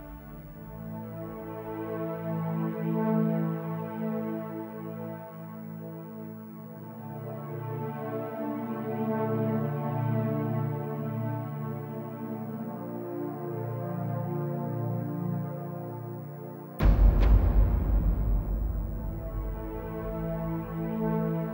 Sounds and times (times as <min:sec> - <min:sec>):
Music: 0:00.0 - 0:21.5.